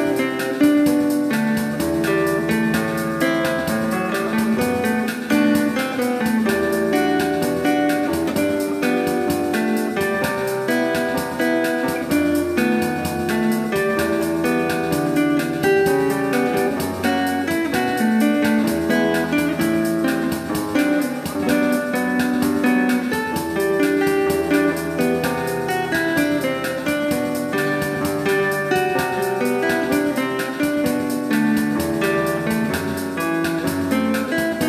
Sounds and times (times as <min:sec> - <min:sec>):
Acoustic guitar: 0:00.0 - 0:34.6.